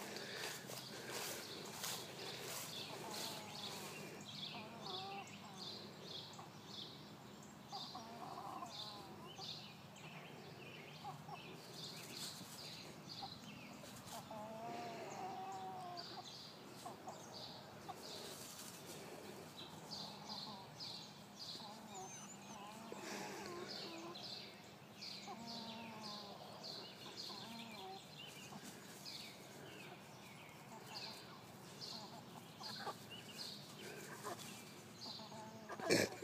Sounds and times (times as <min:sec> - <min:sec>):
Cluck: 0:31.9 - 0:33.0.